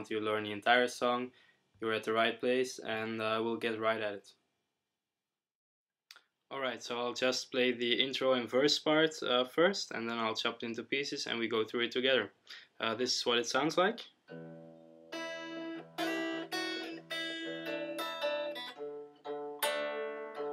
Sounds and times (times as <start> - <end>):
Speech: 0.0 - 4.4, 6.5 - 14.1
Electric guitar: 14.3 - 20.5
Strum: 14.3 - 20.5.